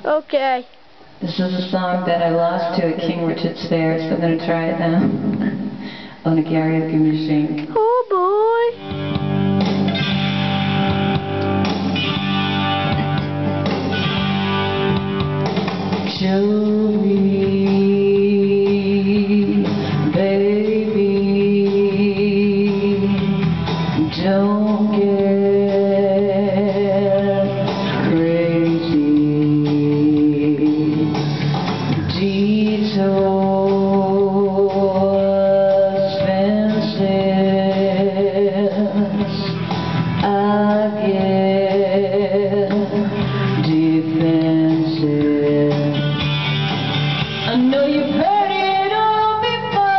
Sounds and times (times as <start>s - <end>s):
Female singing: 1.2s - 5.2s, 6.3s - 8.8s, 16.1s - 23.3s, 24.0s - 31.1s, 32.1s - 39.5s, 40.2s - 46.0s, 47.5s - 49.9s
Music: 1.2s - 49.9s.